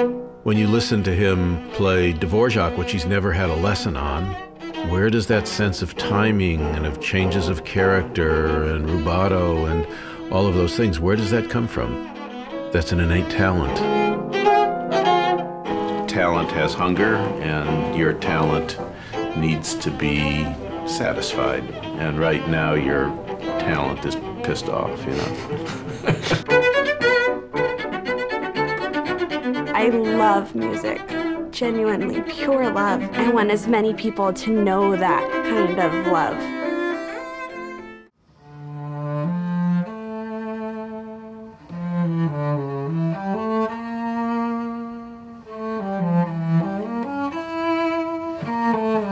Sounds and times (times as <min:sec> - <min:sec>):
Cello: 0:00.0 - 0:49.1
Classical music: 0:00.0 - 0:49.1.